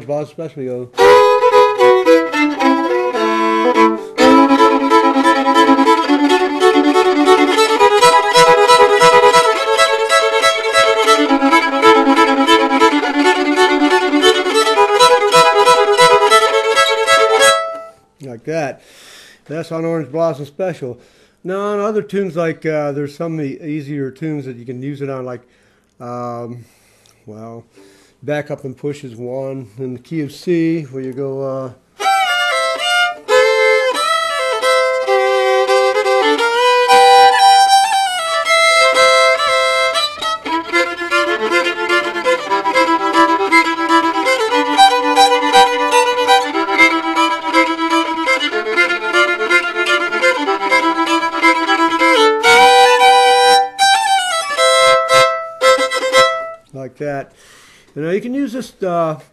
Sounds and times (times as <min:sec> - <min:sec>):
Speech: 0:00.0 - 0:01.0, 0:18.2 - 0:18.8, 0:19.5 - 0:25.4, 0:26.0 - 0:31.8, 0:56.7 - 0:57.3, 0:58.0 - 0:59.3
Violin, fiddle: 0:00.7 - 0:18.0, 0:32.0 - 0:56.7.